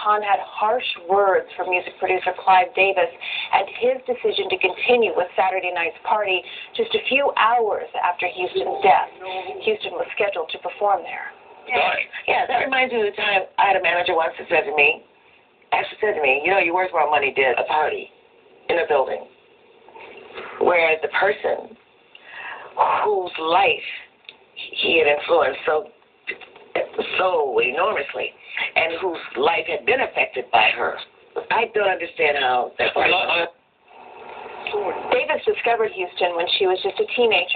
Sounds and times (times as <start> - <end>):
Speech: 0.0 - 15.0, 26.8 - 33.6.